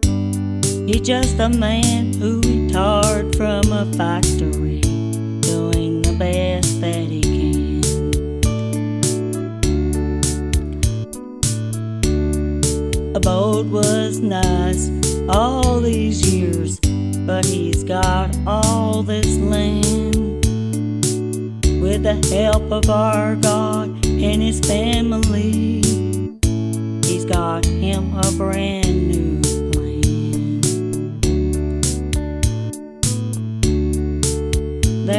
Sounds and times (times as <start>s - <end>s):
Music: 0.0s - 35.1s.